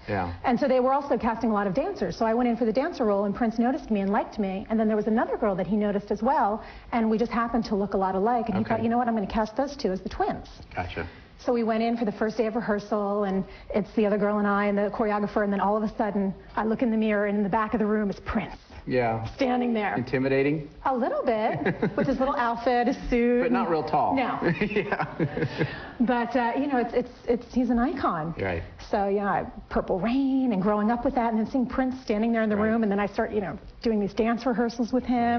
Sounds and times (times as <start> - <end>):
Female speech, woman speaking: 0.4 - 10.6, 11.4 - 18.6, 19.4 - 20.1, 20.8 - 24.6, 26.0 - 35.3.